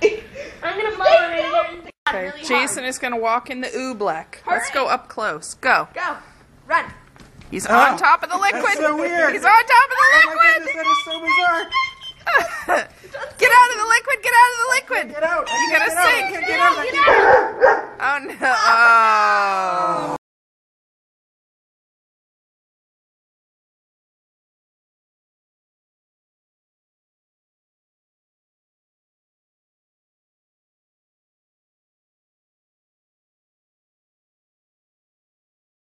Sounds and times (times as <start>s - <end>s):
Bow-wow: 17.0s - 18.0s.